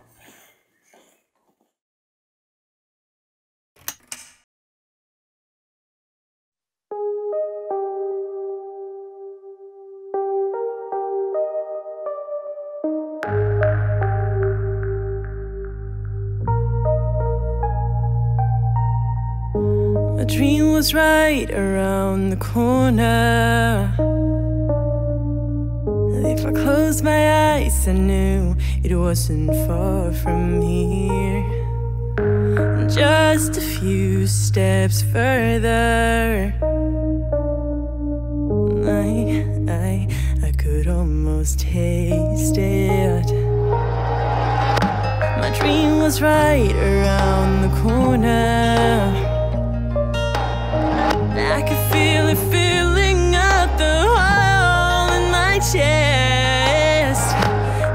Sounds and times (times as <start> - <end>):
Music: 6.9 - 57.9.